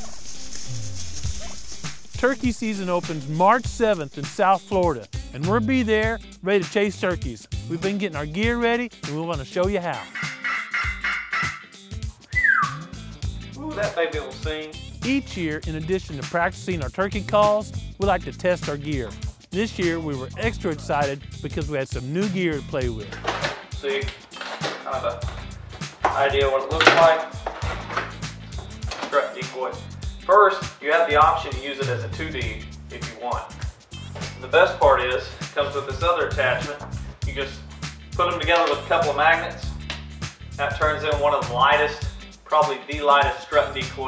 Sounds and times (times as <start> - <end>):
Music: 0.0 - 44.0
Speech: 2.2 - 10.1, 13.6 - 23.2, 23.8 - 24.2, 24.8 - 25.3, 26.1 - 27.3, 29.1 - 33.6, 34.4 - 37.6, 38.2 - 39.7, 40.6 - 44.0.